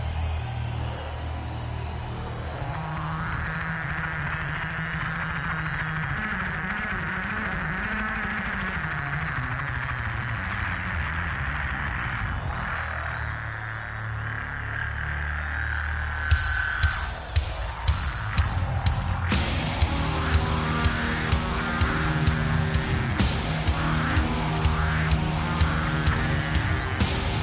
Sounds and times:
Music: 0:00.0 - 0:27.4.

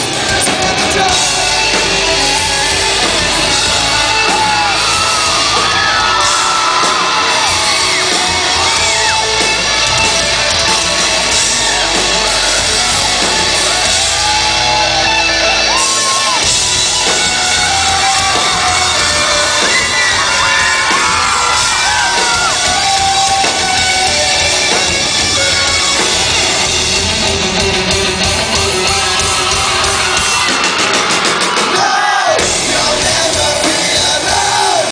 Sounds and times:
Bass guitar: 0:00.0 - 0:34.9.

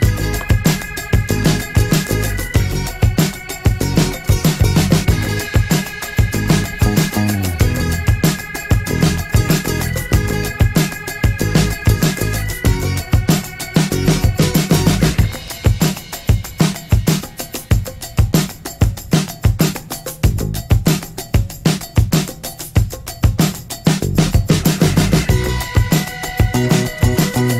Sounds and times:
Music: 0:00.0 - 0:27.5.

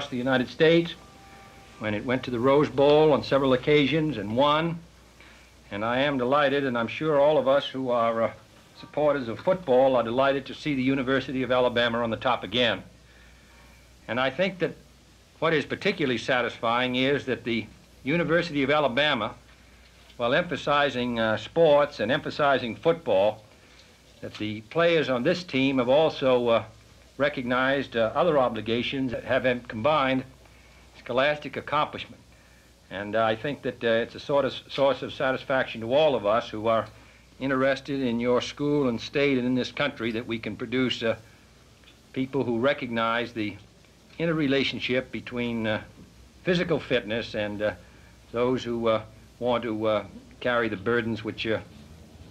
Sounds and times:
Speech: 0:00.0 - 0:01.1, 0:01.8 - 0:04.9, 0:05.7 - 0:12.9, 0:14.1 - 0:14.8, 0:15.4 - 0:19.4, 0:20.2 - 0:23.4, 0:24.2 - 0:30.4, 0:31.0 - 0:32.2, 0:32.9 - 0:41.2, 0:42.1 - 0:51.7.

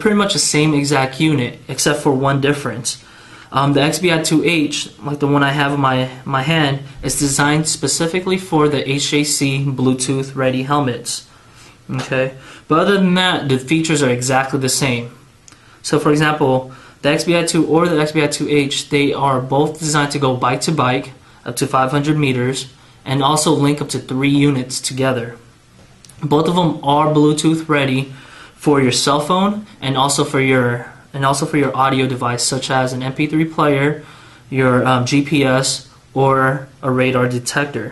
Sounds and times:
Speech: 0:00.0 - 0:11.3, 0:11.9 - 0:15.2, 0:15.8 - 0:25.5, 0:26.1 - 0:37.9.

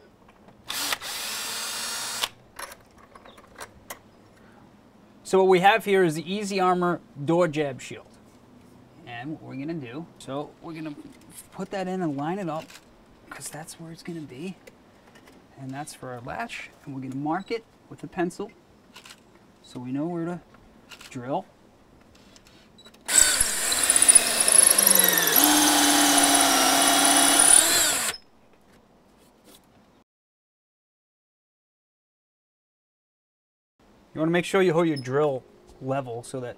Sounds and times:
Speech: 0:05.3 - 0:08.2, 0:09.0 - 0:12.7, 0:13.3 - 0:14.6, 0:15.5 - 0:18.6, 0:19.6 - 0:20.5, 0:21.1 - 0:21.5, 0:34.2 - 0:36.5.

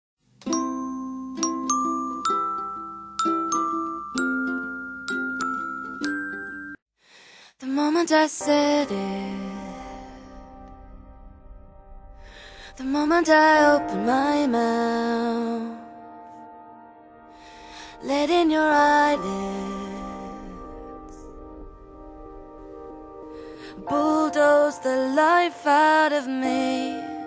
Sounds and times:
Glockenspiel: 0:00.4 - 0:06.8
Lullaby: 0:00.4 - 0:06.8, 0:07.6 - 0:10.5, 0:12.8 - 0:21.8, 0:23.2 - 0:27.2.

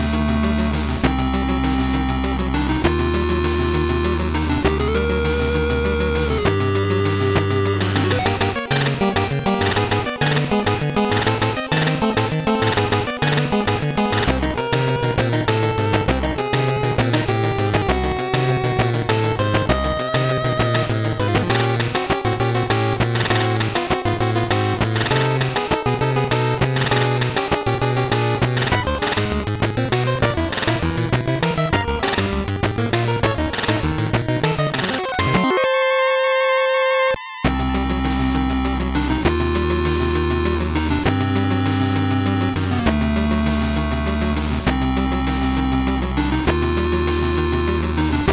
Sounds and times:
Music: 0:00.0 - 0:48.3.

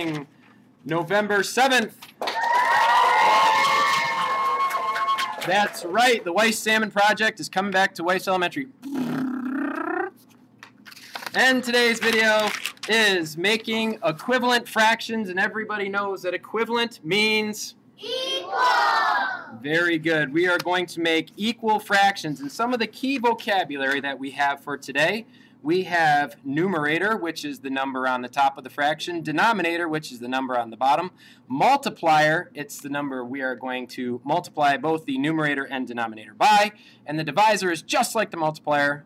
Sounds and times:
Speech: 0:00.0 - 0:02.0, 0:05.5 - 0:08.8, 0:11.4 - 0:18.3, 0:19.6 - 0:39.0
Inside, small room: 0:00.0 - 0:39.0.

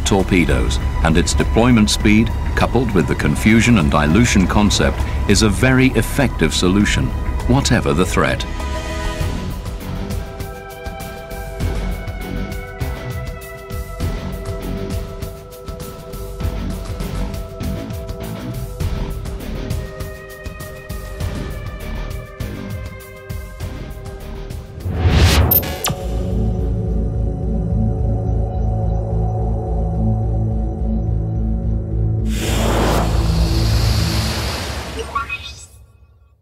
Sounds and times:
Music: 0:00.0 - 0:36.2.

